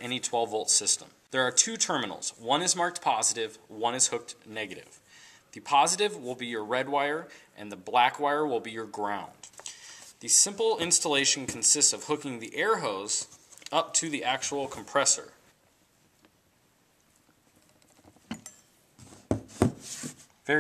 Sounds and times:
Speech: 0.0 - 5.0, 5.6 - 9.4, 10.2 - 15.4.

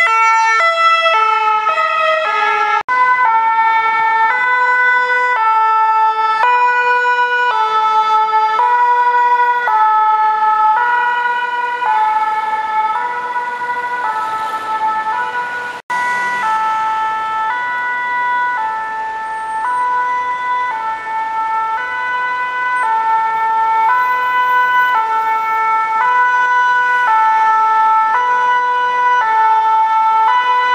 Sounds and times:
Ambulance (siren): 0.0 - 30.7.

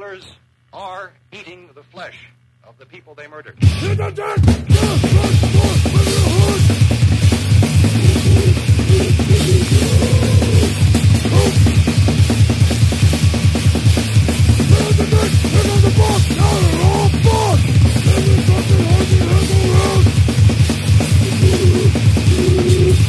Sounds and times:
Music: 3.6 - 23.0.

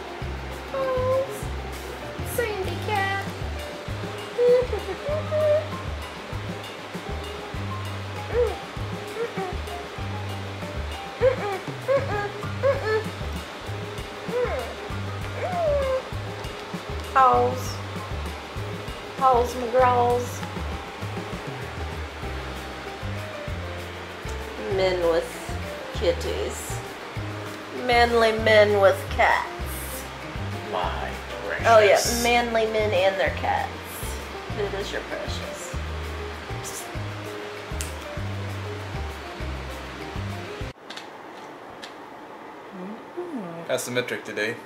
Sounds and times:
Music: 0.0 - 40.8.

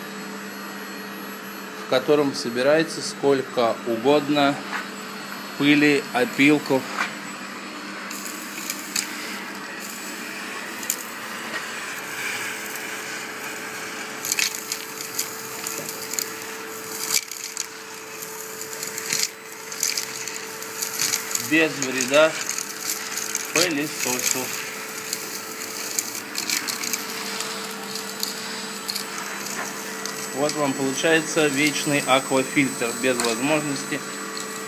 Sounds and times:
Vacuum cleaner: 0.0 - 34.6.

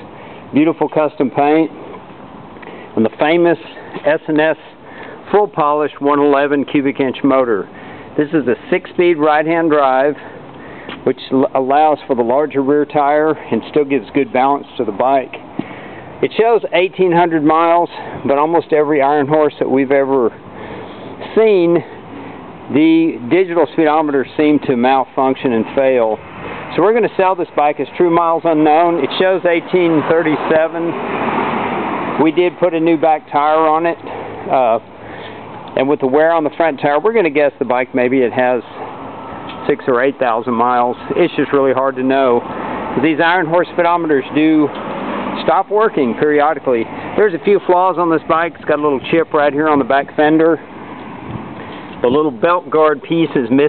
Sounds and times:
Speech: 0.0 - 1.8, 3.0 - 10.3, 11.0 - 15.4, 16.2 - 20.4, 21.2 - 22.0, 22.7 - 31.0, 32.2 - 34.9, 35.7 - 38.8, 39.6 - 42.4, 43.0 - 44.8, 45.4 - 50.7, 52.0 - 53.6.

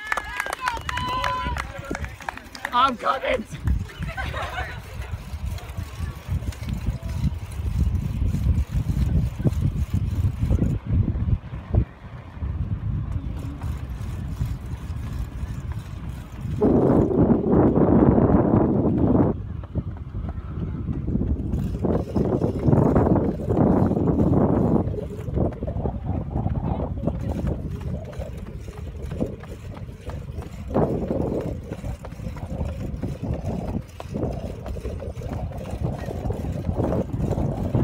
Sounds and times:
Run: 0.0 - 37.8.

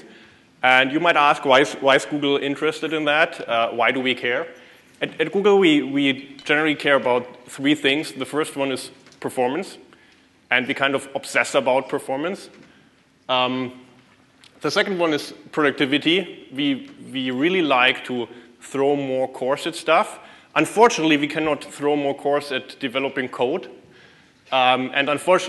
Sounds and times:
Speech: 0.0 - 9.8, 10.5 - 12.6, 13.3 - 13.8, 14.5 - 23.8, 24.5 - 25.4.

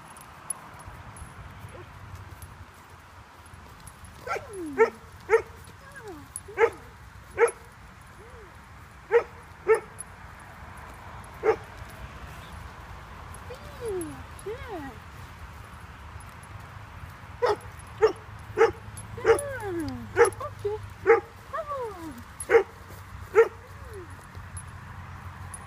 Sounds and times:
Speech: 5.8 - 6.3, 13.5 - 15.0, 19.2 - 20.8, 21.5 - 22.2.

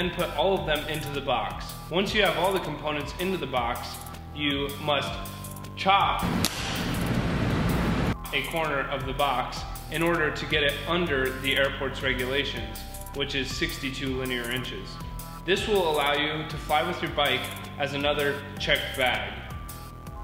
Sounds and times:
Speech: 0.0 - 5.2, 5.8 - 6.2, 8.3 - 19.5
Music: 0.0 - 20.2.

